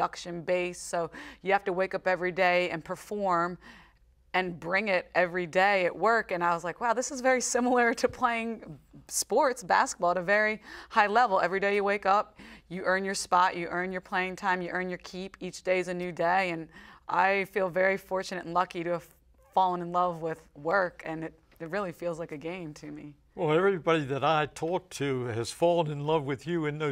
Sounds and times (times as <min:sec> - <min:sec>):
Female speech, woman speaking: 0:00.0 - 0:03.6, 0:04.4 - 0:23.2
Inside, small room: 0:00.0 - 0:26.9.